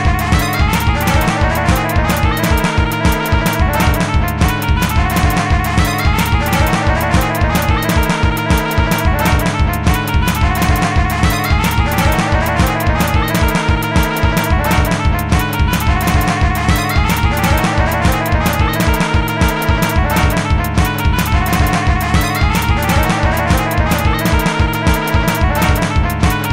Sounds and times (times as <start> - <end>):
Techno: 0.0 - 26.5
Video game music: 0.0 - 26.5.